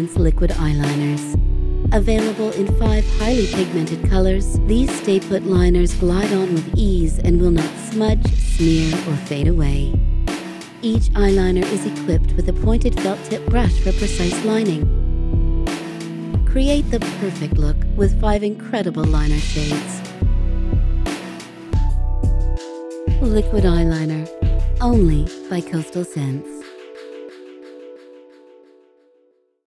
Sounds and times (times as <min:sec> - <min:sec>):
Speech: 0:00.0 - 0:10.0, 0:10.8 - 0:14.9, 0:16.4 - 0:20.0, 0:23.2 - 0:26.6
Music: 0:00.0 - 0:29.7.